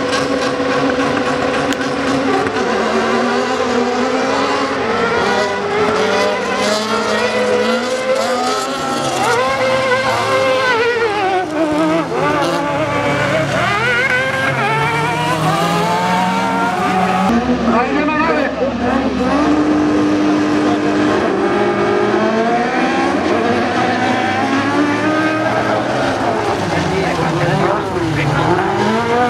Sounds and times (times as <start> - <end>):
Race car, auto racing: 0.0 - 29.2.